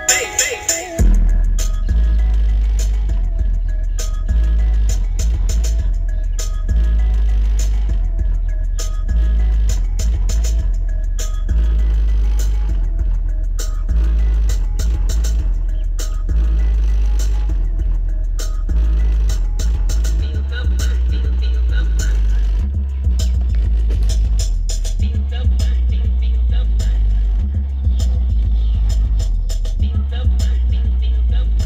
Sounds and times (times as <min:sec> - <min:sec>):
Music: 0:00.0 - 0:31.6.